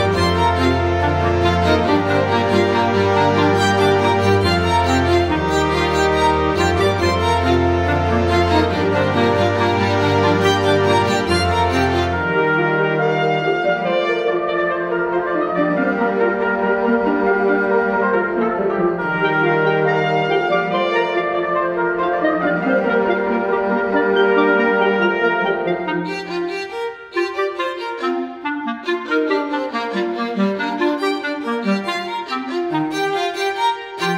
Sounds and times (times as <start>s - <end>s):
Music: 0.0s - 34.1s.